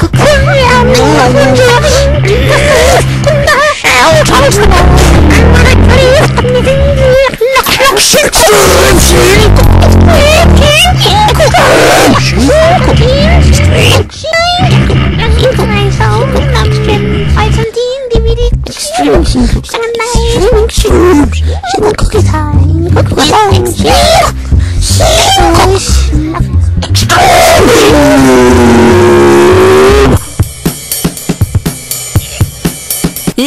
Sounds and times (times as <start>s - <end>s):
Speech: 0.0s - 28.2s
Music: 0.0s - 33.4s.